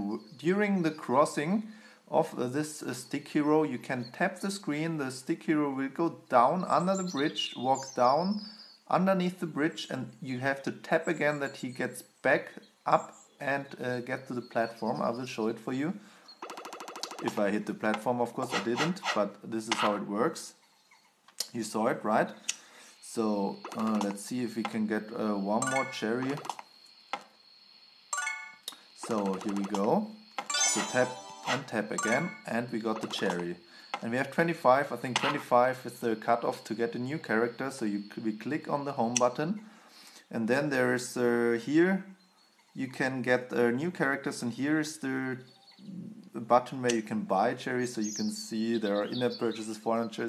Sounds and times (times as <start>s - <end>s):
Chirp, tweet: 0.0s - 1.0s, 6.6s - 8.9s, 11.0s - 15.3s, 45.4s - 46.0s, 47.9s - 50.2s.